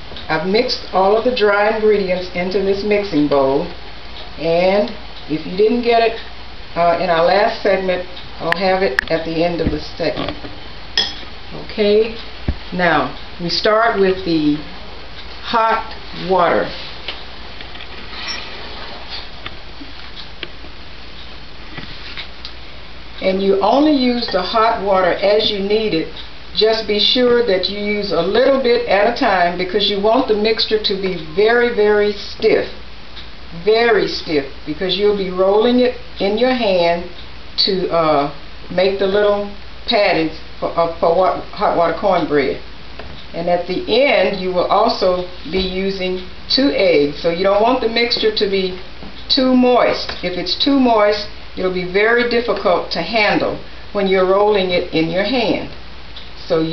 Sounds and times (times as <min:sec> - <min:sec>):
Speech: 0:00.3 - 0:03.8, 0:04.4 - 0:10.4, 0:11.5 - 0:14.7, 0:15.4 - 0:16.9, 0:23.2 - 0:32.8, 0:33.6 - 0:42.7, 0:43.3 - 0:55.8, 0:56.4 - 0:56.7.